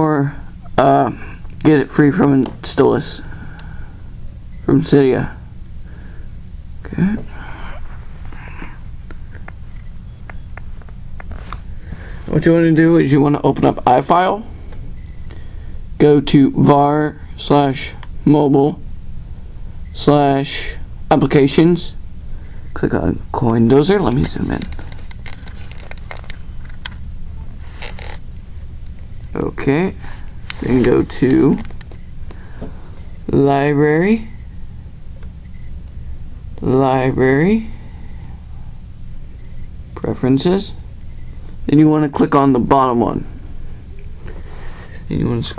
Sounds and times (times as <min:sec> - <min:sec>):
Speech: 0:00.0 - 0:03.3, 0:04.7 - 0:05.4, 0:06.8 - 0:07.3, 0:12.3 - 0:14.5, 0:16.0 - 0:18.8, 0:20.0 - 0:22.0, 0:22.8 - 0:24.7, 0:29.3 - 0:30.0, 0:30.6 - 0:31.7, 0:33.3 - 0:34.3, 0:36.6 - 0:37.8, 0:40.0 - 0:40.8, 0:41.7 - 0:43.3, 0:45.1 - 0:45.5.